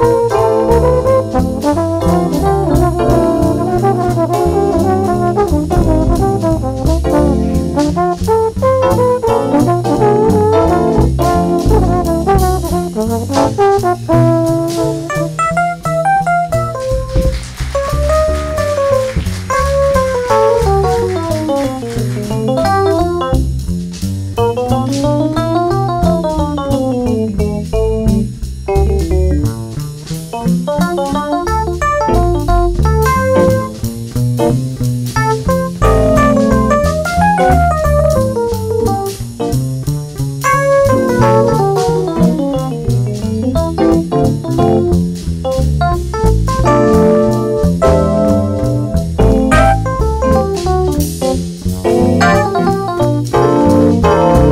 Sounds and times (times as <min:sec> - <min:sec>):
Trombone: 0:00.0 - 0:23.6, 0:24.4 - 0:39.8, 0:40.4 - 0:54.5
Jazz: 0:00.0 - 0:54.5.